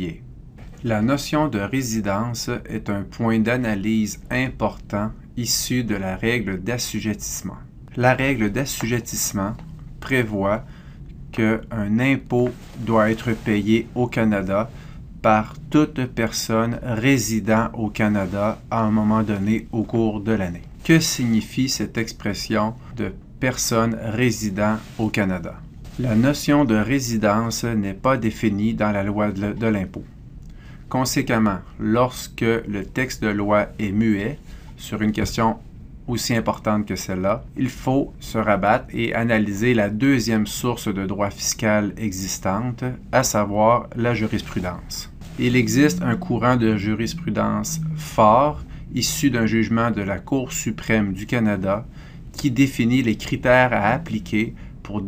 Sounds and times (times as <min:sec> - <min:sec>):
Speech: 0:00.0 - 0:10.7, 0:11.3 - 0:30.1, 0:30.9 - 0:55.0.